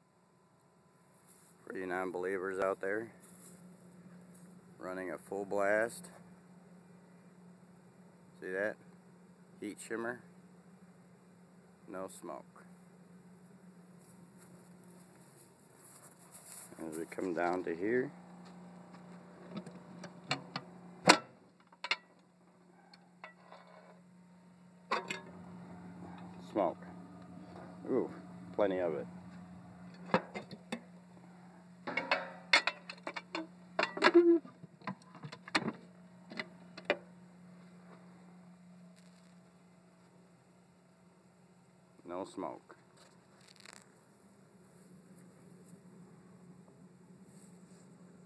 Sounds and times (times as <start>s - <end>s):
Speech: 1.6s - 3.2s, 4.8s - 6.2s, 8.4s - 8.8s, 9.6s - 10.3s, 11.9s - 12.7s, 16.7s - 18.2s, 26.4s - 26.9s, 27.8s - 29.1s, 42.0s - 42.8s.